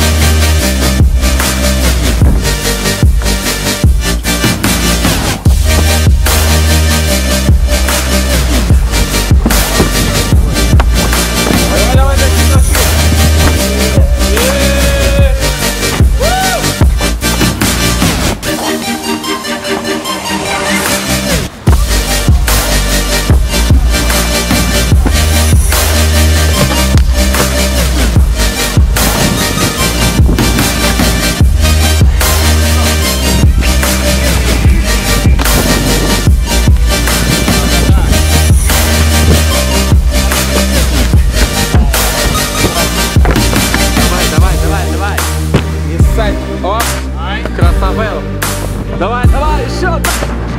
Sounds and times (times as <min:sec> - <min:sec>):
Music: 0:00.0 - 0:50.5.